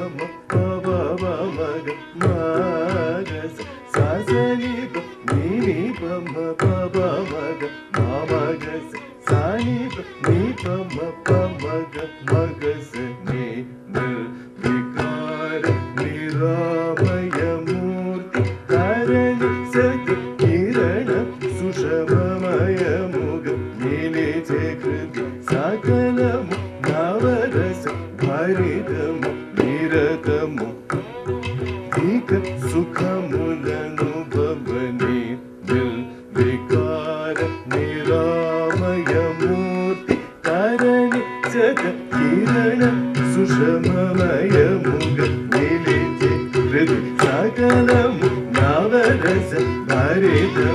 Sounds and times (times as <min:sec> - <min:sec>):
Tabla: 0:00.0 - 0:50.7.